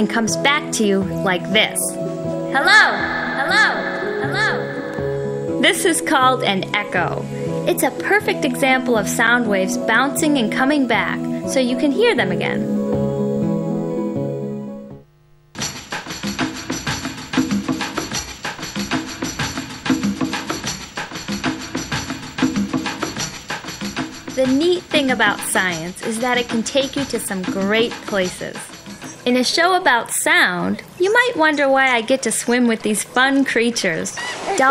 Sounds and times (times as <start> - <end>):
Speech: 0.0 - 2.0, 5.6 - 12.6, 24.4 - 28.7, 29.3 - 34.7
Music: 0.0 - 34.7.